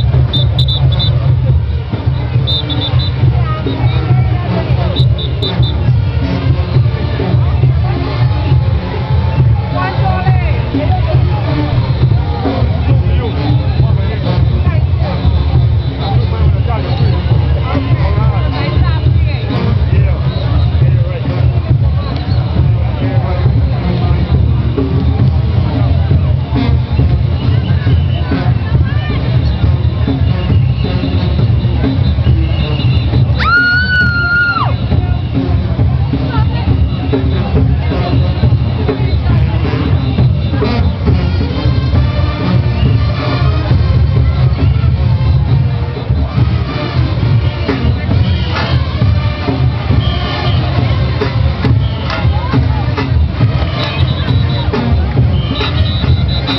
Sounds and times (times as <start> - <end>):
Speech: 0.0 - 32.9, 34.2 - 42.2, 43.0 - 56.5
Exciting music: 0.0 - 56.5.